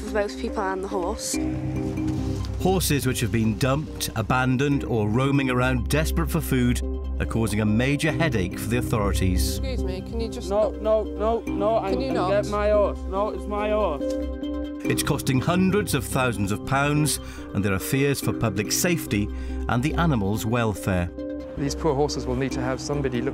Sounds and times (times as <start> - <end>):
Music: 0.0 - 23.3
Speech: 14.9 - 23.3.